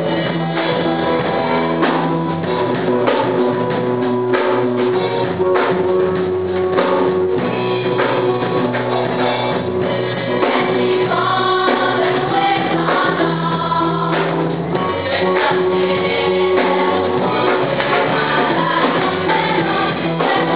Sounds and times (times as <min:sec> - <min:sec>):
Choir: 0:09.8 - 0:20.5.